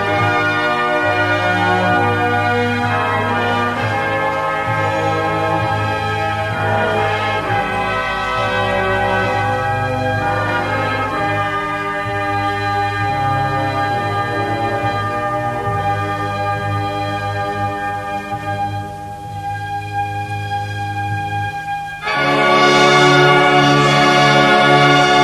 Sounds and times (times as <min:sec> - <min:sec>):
Music: 0:00.0 - 0:25.2.